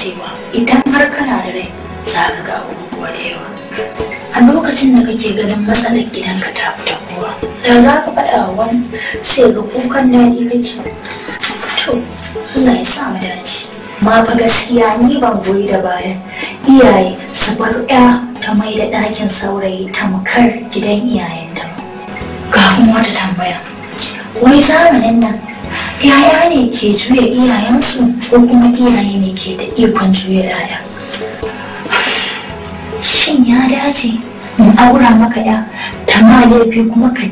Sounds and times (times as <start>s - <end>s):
Speech: 0.0s - 3.6s, 4.3s - 10.8s, 11.8s - 21.8s, 22.6s - 23.6s, 24.4s - 25.4s, 26.0s - 30.9s, 33.0s - 37.3s
Music: 0.0s - 37.3s.